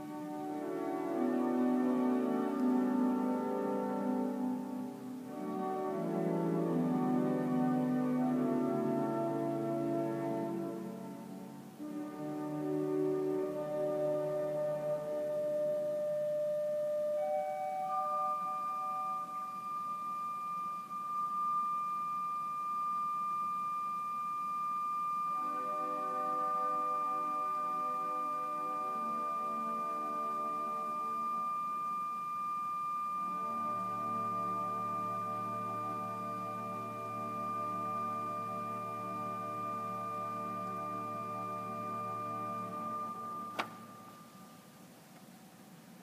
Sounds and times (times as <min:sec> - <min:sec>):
Keyboard (musical): 0:00.0 - 0:45.0.